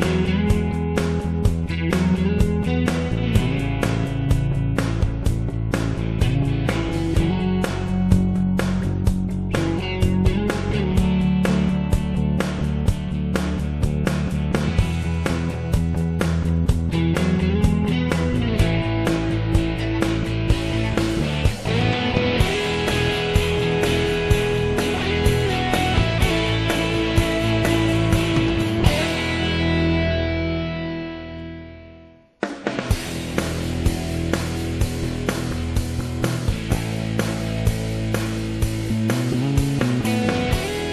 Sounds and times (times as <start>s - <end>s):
Music: 0.0s - 40.9s.